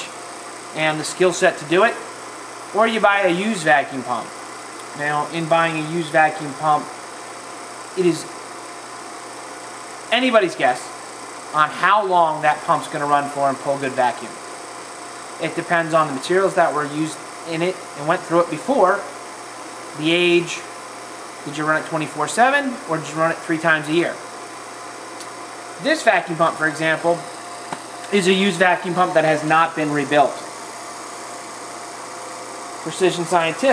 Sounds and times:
Speech: 0.8 - 2.0, 2.8 - 4.3, 5.0 - 6.9, 8.0 - 8.3, 10.1 - 10.9, 11.6 - 14.4, 15.4 - 19.2, 20.0 - 20.7, 21.4 - 24.2, 25.8 - 27.3, 28.1 - 30.5, 32.8 - 33.7.

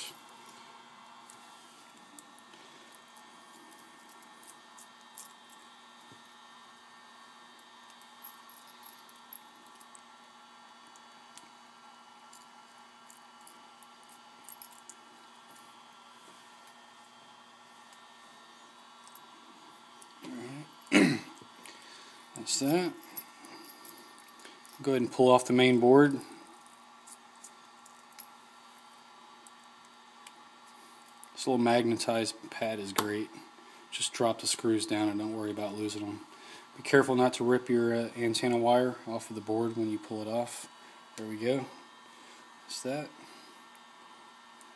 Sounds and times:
Inside, small room: 0.0 - 44.7
Speech: 20.2 - 20.7, 22.4 - 23.0, 24.8 - 26.3, 31.4 - 41.8, 42.7 - 43.2.

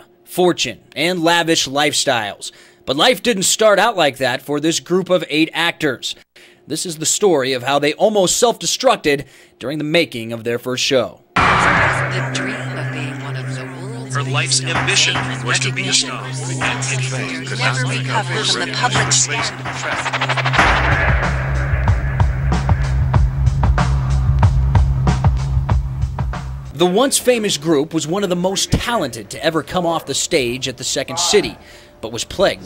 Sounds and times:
Speech: 0.0 - 20.2, 26.8 - 32.6
Music: 11.4 - 26.9.

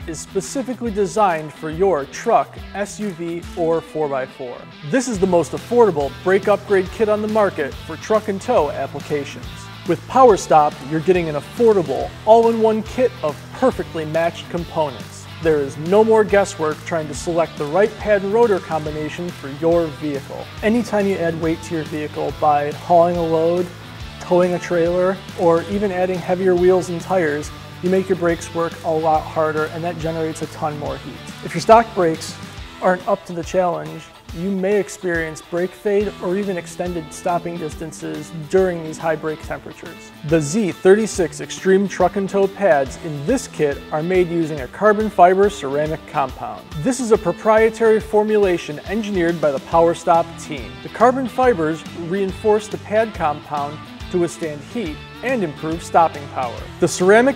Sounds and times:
Music: 0.0 - 57.3
Speech: 0.0 - 57.3.

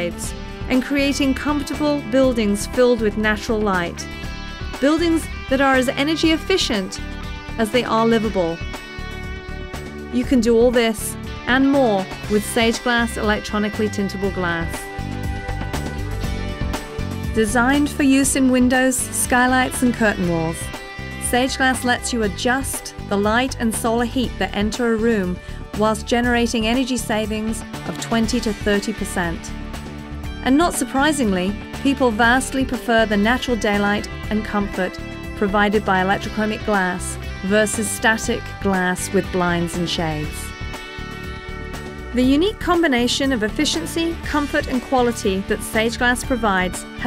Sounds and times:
Speech: 0.0 - 4.1, 4.8 - 7.0, 7.6 - 8.6, 10.1 - 14.9, 17.4 - 29.5, 30.5 - 40.5, 42.2 - 47.0
Music: 0.0 - 47.0.

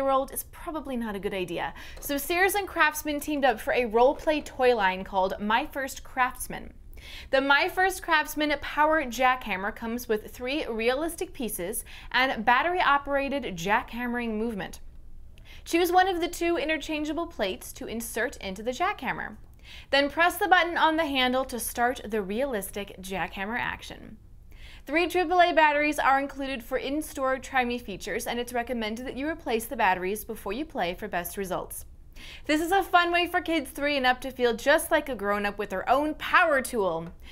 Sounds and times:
Speech: 0.0 - 14.8, 15.7 - 24.2, 24.9 - 31.9, 32.5 - 37.2.

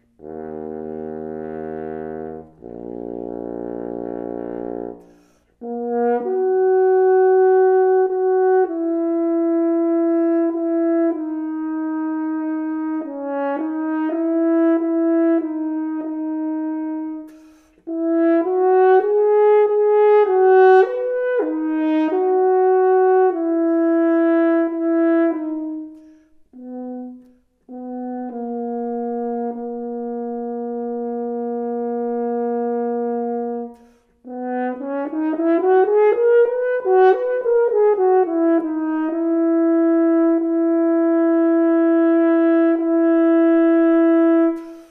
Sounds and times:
French horn: 0.0 - 44.9.

